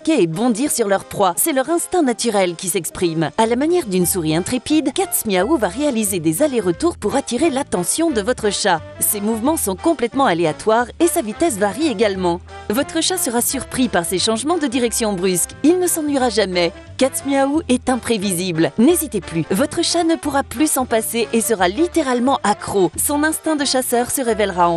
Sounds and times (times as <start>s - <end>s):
Music: 0.0s - 24.7s
Speech: 0.0s - 24.7s.